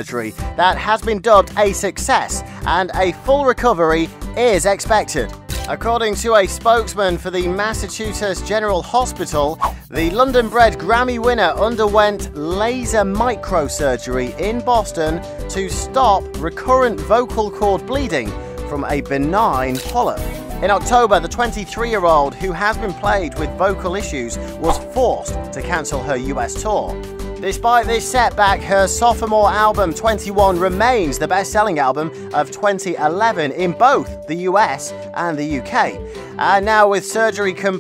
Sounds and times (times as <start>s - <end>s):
Music: 0.0s - 37.8s
Speech: 0.0s - 37.8s.